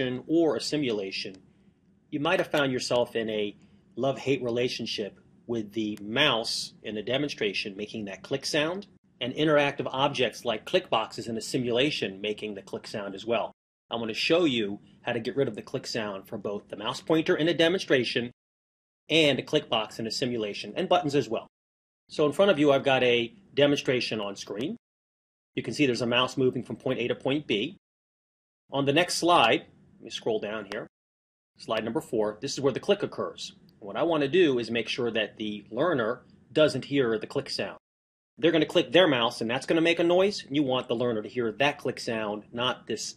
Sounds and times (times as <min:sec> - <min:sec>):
Speech: 0:00.0 - 0:01.4, 0:02.2 - 0:18.4, 0:19.1 - 0:21.5, 0:22.1 - 0:24.8, 0:25.6 - 0:27.8, 0:28.7 - 0:30.9, 0:31.6 - 0:37.8, 0:38.4 - 0:43.1.